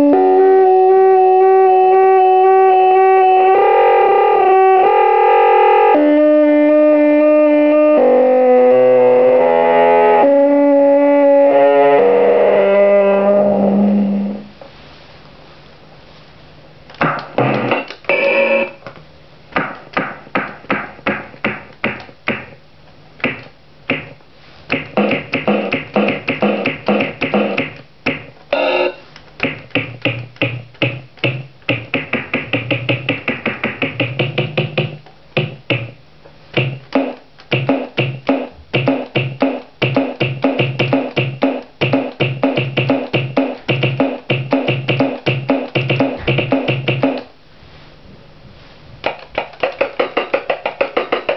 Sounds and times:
Synthesizer: 0.0s - 14.5s, 23.3s - 36.0s, 36.6s - 47.3s.

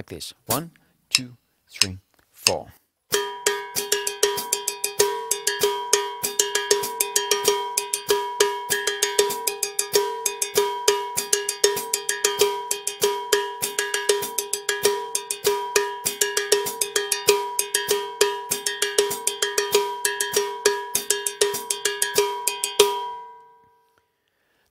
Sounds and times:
Cowbell: 3.2s - 23.8s.

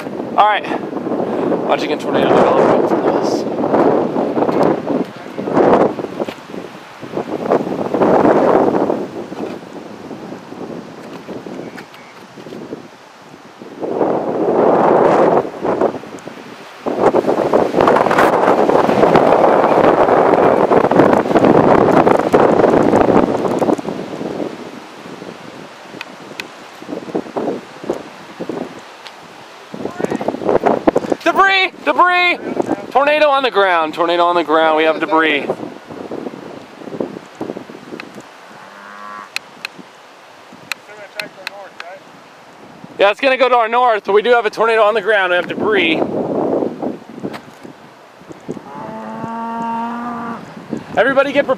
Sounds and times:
Speech: 1.7s - 3.4s, 31.2s - 35.5s, 40.8s - 42.0s, 43.0s - 46.0s, 51.0s - 51.5s.

